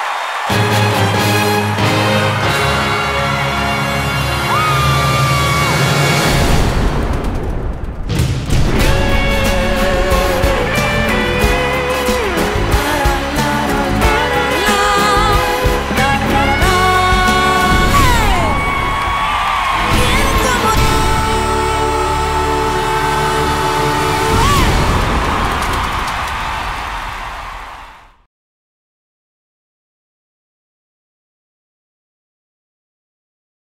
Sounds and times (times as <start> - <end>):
Music: 0.2 - 6.8, 8.2 - 25.0.